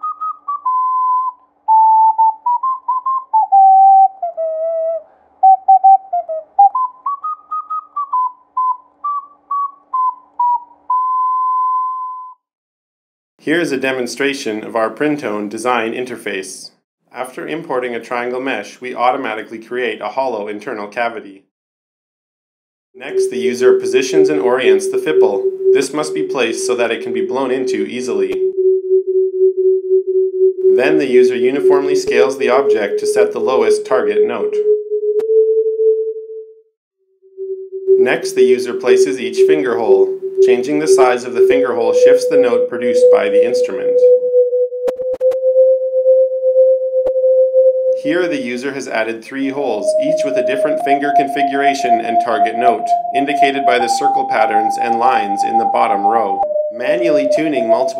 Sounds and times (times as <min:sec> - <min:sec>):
Sidetone: 0:00.0 - 0:09.2, 0:23.0 - 0:36.7, 0:37.3 - 0:57.9
Speech: 0:13.4 - 0:21.5, 0:23.0 - 0:28.4, 0:30.8 - 0:34.6, 0:38.0 - 0:44.0, 0:48.0 - 0:57.9.